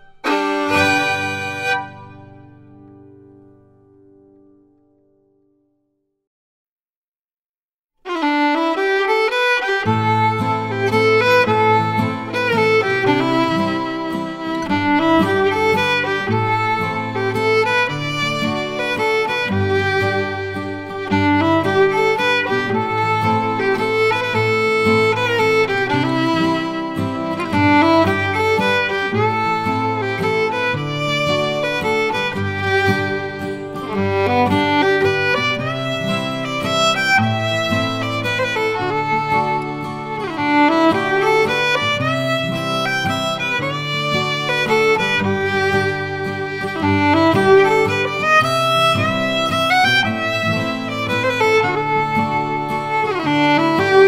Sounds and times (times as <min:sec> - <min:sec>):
Violin, fiddle: 0:00.0 - 0:02.9, 0:08.1 - 0:54.0.